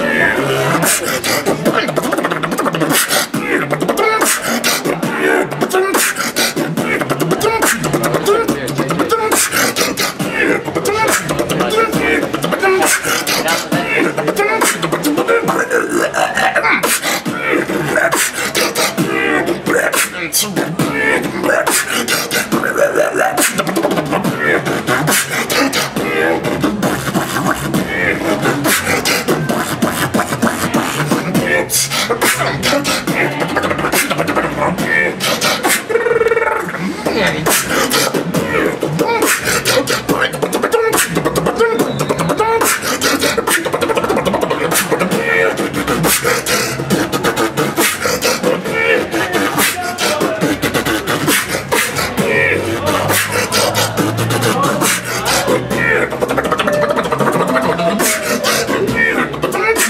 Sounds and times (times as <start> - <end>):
Speech: 0.0 - 2.6, 6.8 - 18.3, 19.0 - 21.8, 36.8 - 42.0, 48.4 - 59.8
Beatboxing: 0.0 - 59.8.